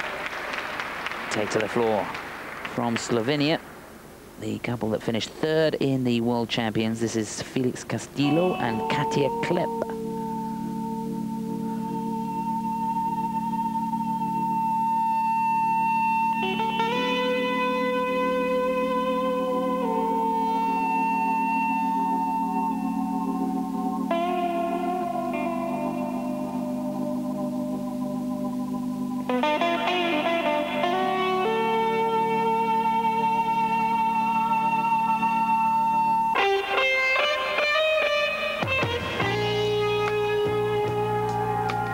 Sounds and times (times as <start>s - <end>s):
Music: 0.0s - 4.1s, 6.0s - 41.9s
Inside, large room or hall: 0.0s - 4.5s, 9.0s - 41.9s.